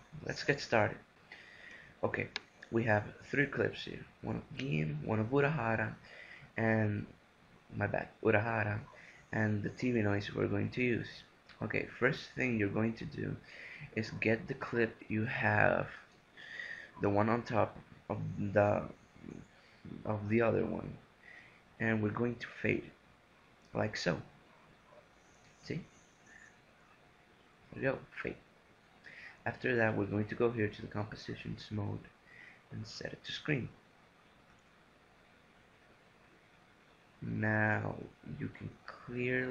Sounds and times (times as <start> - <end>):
Speech: 0.1 - 1.0, 2.0 - 6.0, 6.6 - 7.1, 7.7 - 16.0, 17.0 - 21.0, 21.8 - 23.0, 23.7 - 24.3, 25.6 - 25.8, 27.8 - 28.4, 29.4 - 32.1, 32.7 - 33.8, 37.2 - 39.5.